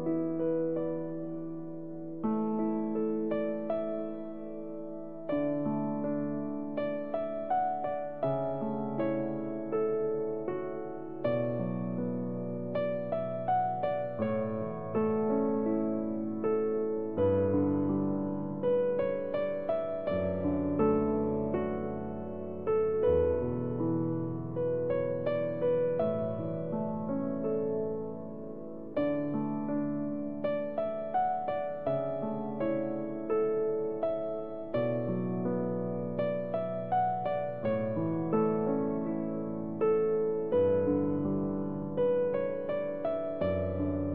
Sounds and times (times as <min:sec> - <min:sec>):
Music: 0:00.0 - 0:44.1.